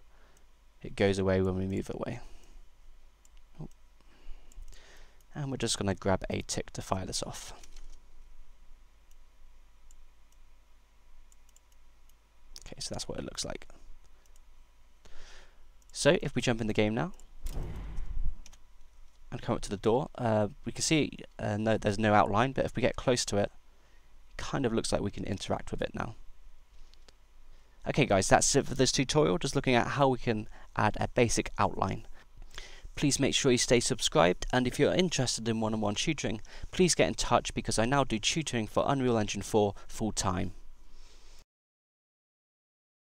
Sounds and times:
Speech: 0.8s - 2.3s, 5.3s - 7.6s, 12.6s - 13.7s, 15.9s - 17.2s, 19.3s - 23.6s, 24.4s - 26.2s, 27.8s - 32.0s, 33.0s - 40.6s.

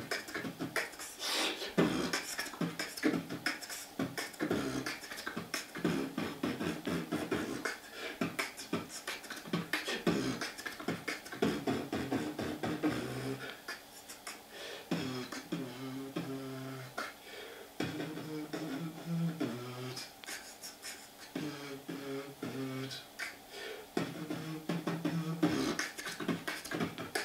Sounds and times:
Beatboxing: 0.0s - 17.2s, 17.8s - 27.2s.

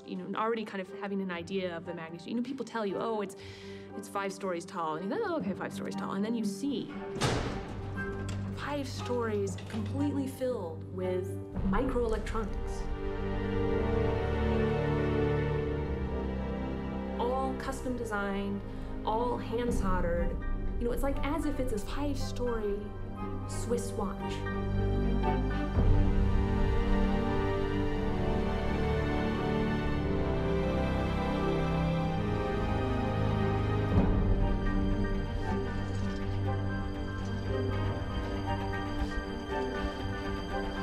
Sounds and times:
Speech: 0.0s - 3.4s, 4.0s - 7.0s, 8.6s - 12.9s, 17.2s - 24.5s
Music: 0.0s - 40.8s.

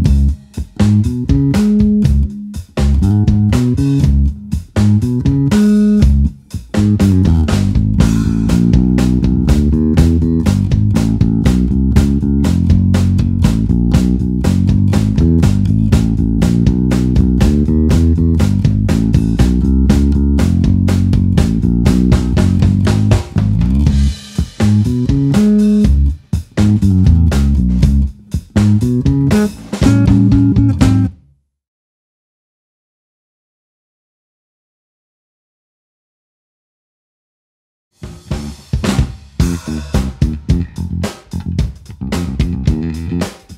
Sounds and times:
Music: 0.0s - 31.4s, 38.0s - 43.5s.

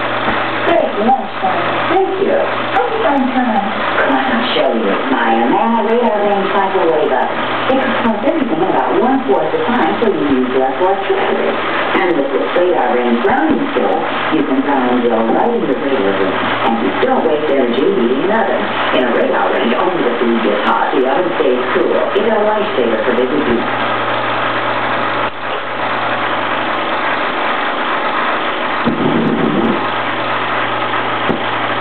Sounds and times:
Speech: 0.6s - 23.7s.

